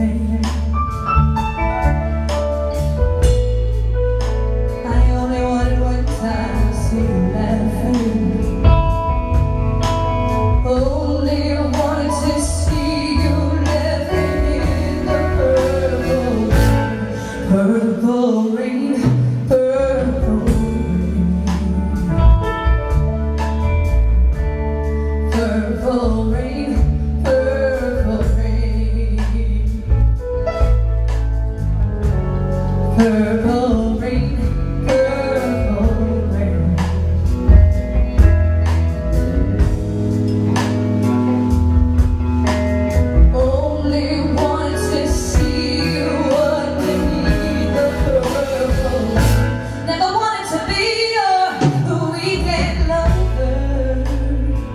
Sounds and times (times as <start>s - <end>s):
Music: 0.0s - 54.7s.